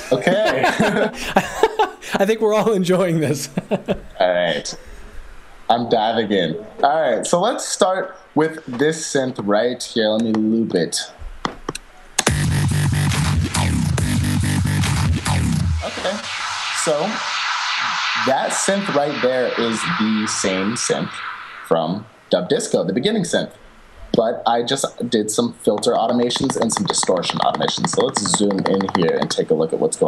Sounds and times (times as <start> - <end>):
Speech: 0.0 - 3.6, 4.2 - 4.8, 5.7 - 11.2, 15.8 - 17.2, 17.8 - 23.6, 24.2 - 30.0
Music: 12.2 - 16.0.